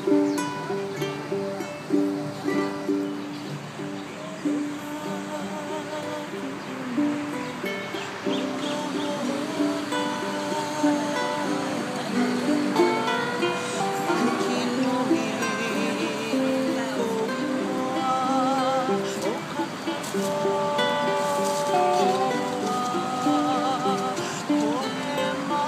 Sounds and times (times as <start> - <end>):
Music: 0.0 - 25.6
Female singing: 4.1 - 7.6, 8.3 - 25.6.